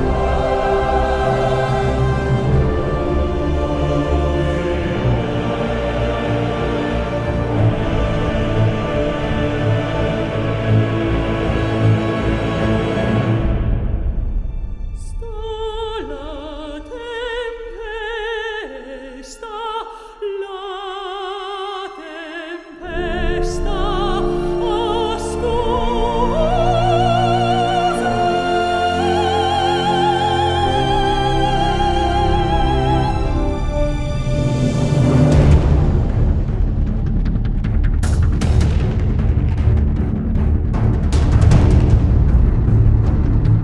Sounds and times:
Christmas music: 0:00.0 - 0:15.3, 0:21.5 - 0:36.8.

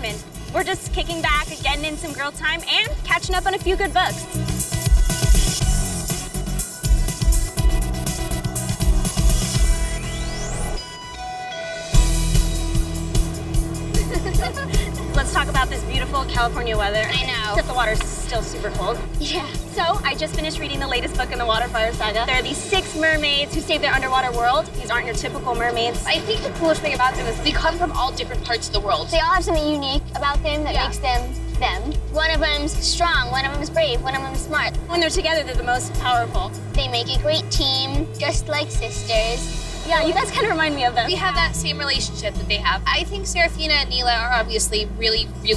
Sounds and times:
Music: 0:00.0 - 0:45.5.

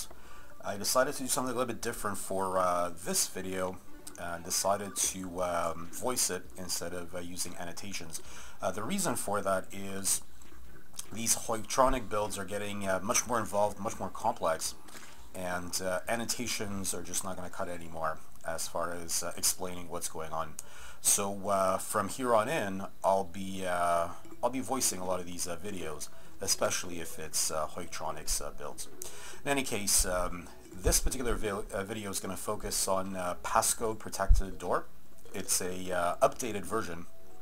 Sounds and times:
Speech: 0:00.0 - 0:10.3, 0:11.0 - 0:14.8, 0:15.4 - 0:37.1.

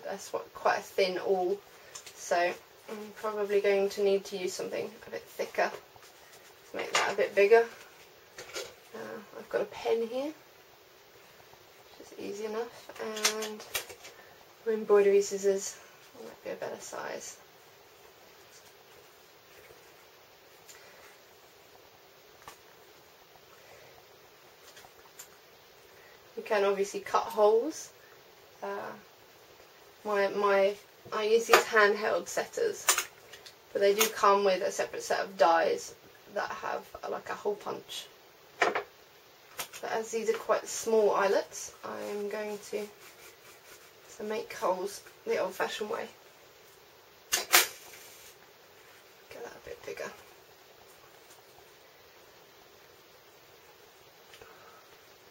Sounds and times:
Speech: 0:00.0 - 0:01.6, 0:02.2 - 0:05.8, 0:06.7 - 0:07.8, 0:08.9 - 0:10.4, 0:11.9 - 0:13.7, 0:14.6 - 0:17.4, 0:26.4 - 0:27.9, 0:28.6 - 0:29.0, 0:30.0 - 0:33.0, 0:33.8 - 0:38.1, 0:39.8 - 0:43.0, 0:44.1 - 0:46.2, 0:49.3 - 0:50.2
Inside, small room: 0:00.0 - 0:55.3.

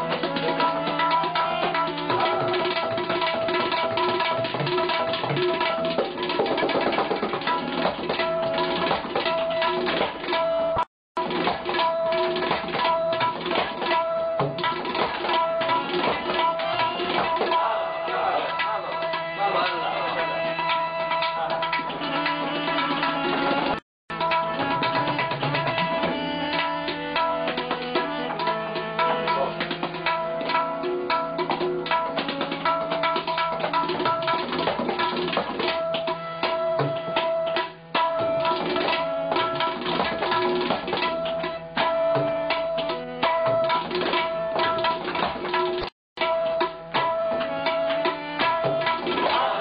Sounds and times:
Tabla: 0:00.0 - 0:49.6
Speech: 0:17.6 - 0:20.6, 0:21.3 - 0:21.7, 0:29.0 - 0:29.6.

